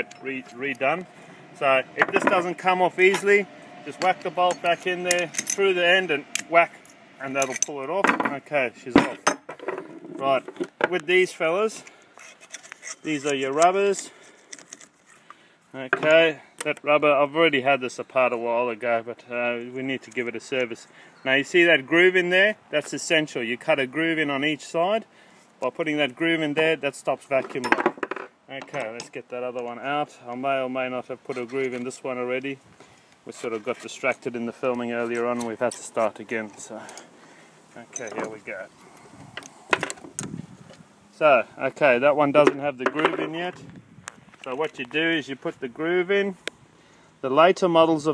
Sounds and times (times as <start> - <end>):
Speech: 0.0 - 1.0, 1.6 - 9.2, 10.2 - 11.9, 13.1 - 14.1, 15.8 - 27.8, 28.5 - 32.6, 33.3 - 37.0, 37.8 - 38.7, 41.2 - 43.6, 44.4 - 46.4, 47.2 - 48.1.